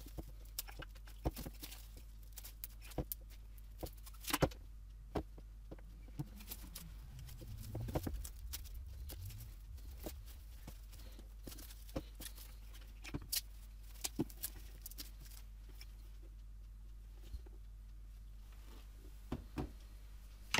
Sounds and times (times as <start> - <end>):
Inside, small room: 0.0 - 20.6
Silence: 5.8 - 12.8.